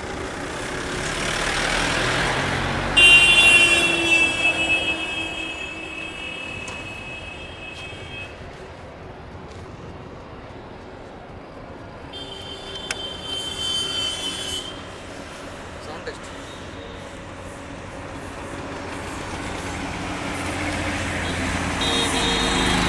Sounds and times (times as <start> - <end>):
Walk, footsteps: 7.7 - 11.8.